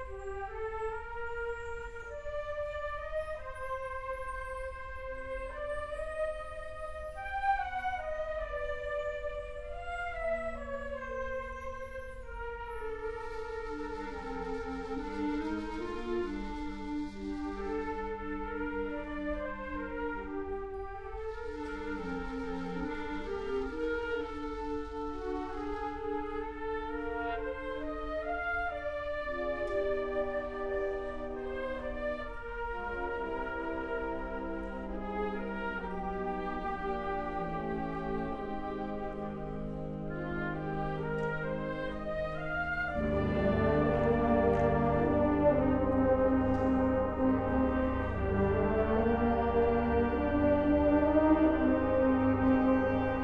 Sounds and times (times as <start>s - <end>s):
Music: 0.0s - 53.2s.